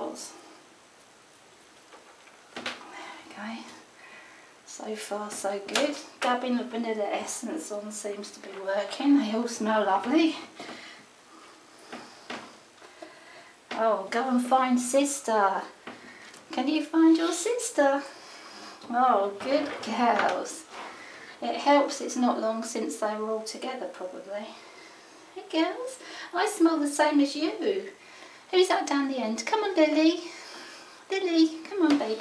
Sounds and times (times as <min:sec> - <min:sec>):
Speech: 0:00.0 - 0:00.4, 0:03.3 - 0:03.8, 0:04.7 - 0:10.6, 0:13.7 - 0:15.8, 0:16.5 - 0:18.2, 0:18.9 - 0:20.7, 0:21.4 - 0:24.6, 0:25.4 - 0:30.4, 0:31.1 - 0:32.2.